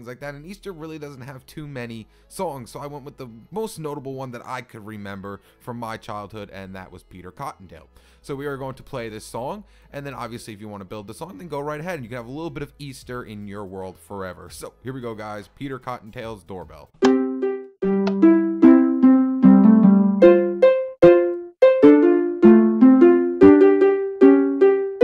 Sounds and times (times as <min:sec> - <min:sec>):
Speech: 0:00.0 - 0:17.0
Music: 0:00.0 - 0:25.0.